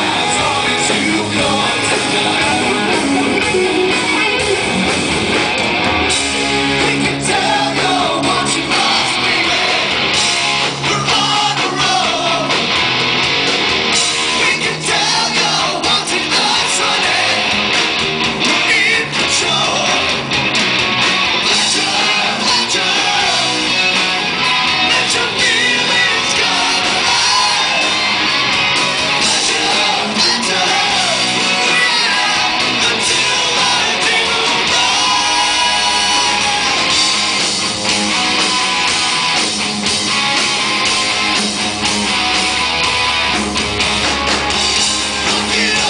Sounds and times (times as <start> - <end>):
Music: 0.0 - 45.8.